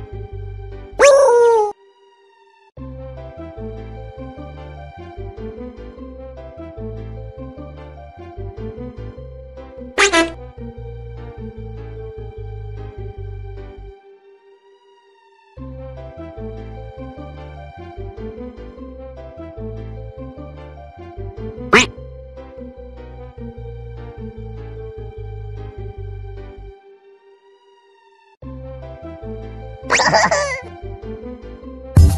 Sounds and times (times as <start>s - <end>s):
Music: 0.0s - 1.1s, 1.8s - 32.1s.